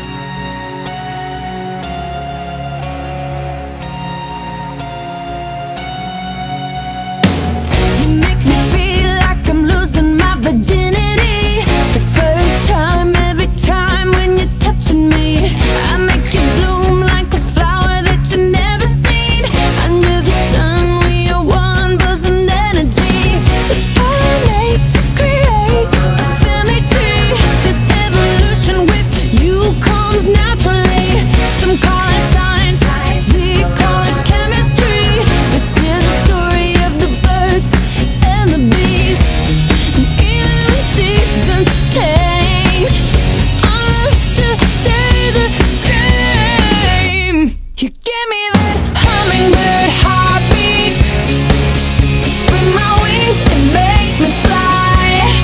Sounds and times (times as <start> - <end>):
Music: 0.0 - 55.4.